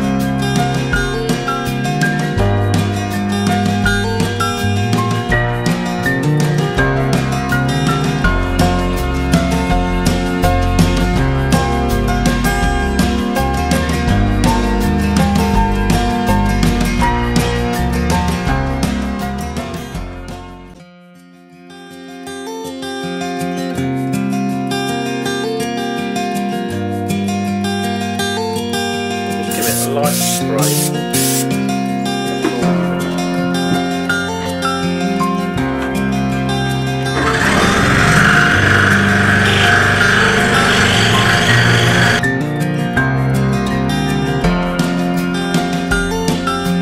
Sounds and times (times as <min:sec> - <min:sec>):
Music: 0:00.0 - 0:46.8.